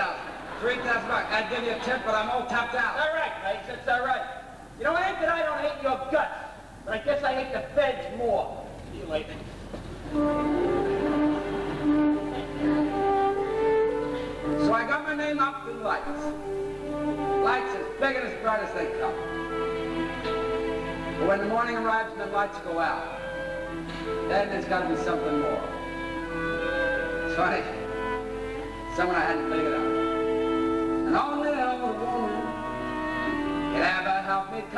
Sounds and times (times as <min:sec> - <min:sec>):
Male speech, man speaking: 0:00.0 - 0:09.4, 0:14.6 - 0:16.4, 0:17.4 - 0:19.2, 0:21.2 - 0:23.2, 0:24.3 - 0:25.7, 0:27.3 - 0:27.8, 0:29.0 - 0:29.9, 0:31.1 - 0:32.4, 0:33.8 - 0:34.7
Narration, monologue: 0:00.0 - 0:09.8, 0:14.0 - 0:34.7
Music: 0:09.4 - 0:34.7.